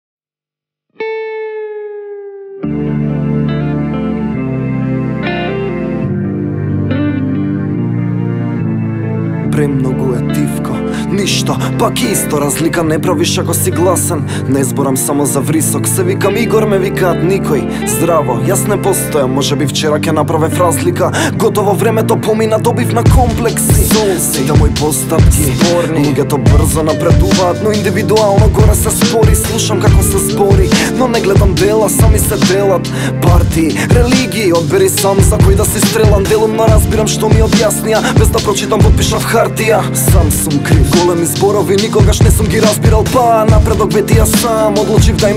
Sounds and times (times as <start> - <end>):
Music: 1.0 - 45.3
Speech: 9.5 - 21.1.